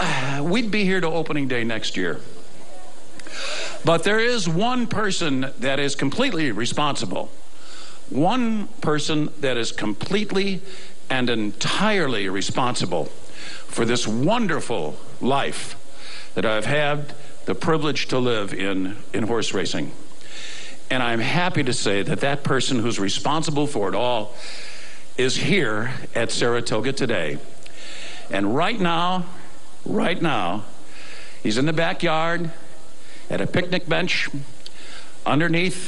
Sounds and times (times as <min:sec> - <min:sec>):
Narration, monologue: 0:00.0 - 0:35.8
Male speech, man speaking: 0:00.4 - 0:02.2, 0:03.8 - 0:07.3, 0:08.2 - 0:13.1, 0:13.8 - 0:15.8, 0:16.4 - 0:19.9, 0:20.9 - 0:24.3, 0:25.2 - 0:27.4, 0:28.3 - 0:29.3, 0:29.9 - 0:30.7, 0:31.5 - 0:32.6, 0:33.3 - 0:34.4, 0:35.3 - 0:35.8.